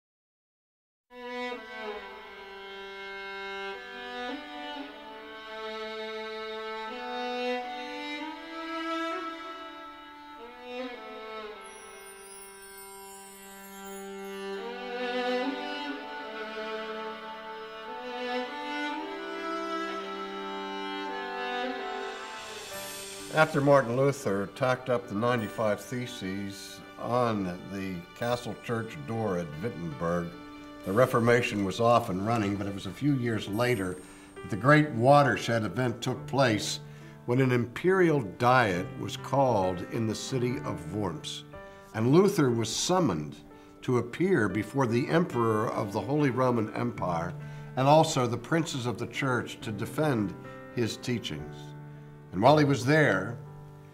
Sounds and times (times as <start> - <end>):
Violin, fiddle: 1.1 - 53.9.